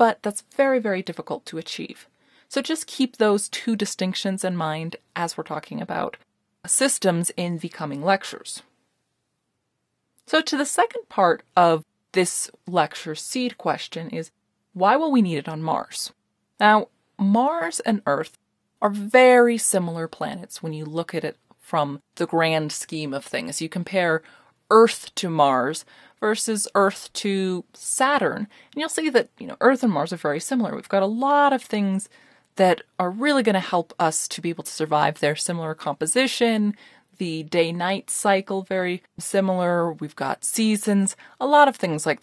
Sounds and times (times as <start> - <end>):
Narration, monologue: 0.0 - 42.2.